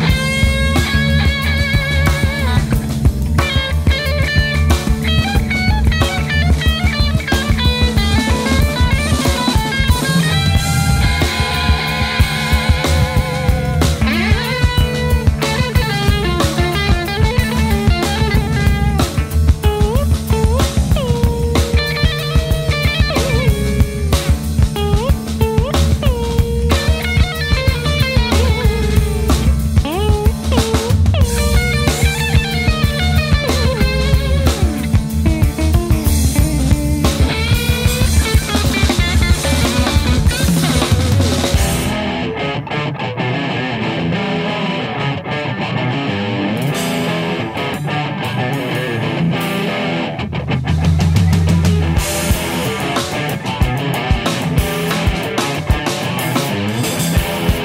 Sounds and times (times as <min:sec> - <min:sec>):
Guitar: 0:00.0 - 0:57.6
Psychedelic rock: 0:00.0 - 0:57.6.